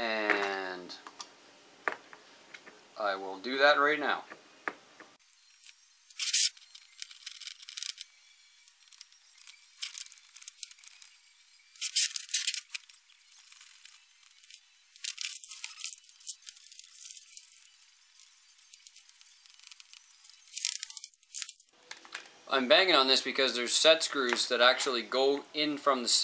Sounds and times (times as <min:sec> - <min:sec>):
Tearing: 0:06.1 - 0:08.0, 0:11.8 - 0:17.8.